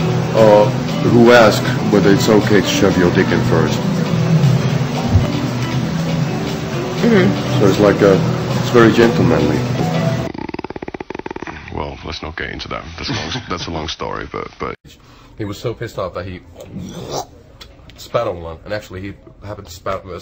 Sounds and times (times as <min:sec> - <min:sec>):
Music: 0:00.0 - 0:10.3
Snoring: 0:10.3 - 0:11.8
Speech: 0:11.7 - 0:14.8, 0:15.4 - 0:16.6, 0:17.6 - 0:20.2.